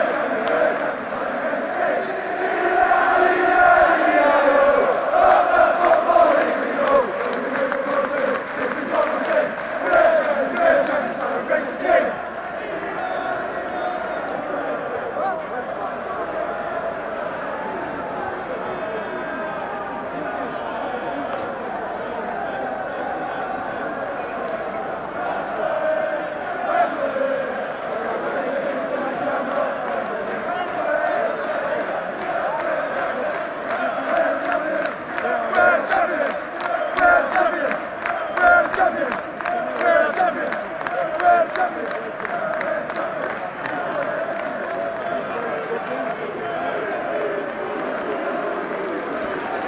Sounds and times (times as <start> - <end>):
Speech: 6.1 - 16.8, 17.4 - 25.7, 28.0 - 49.6.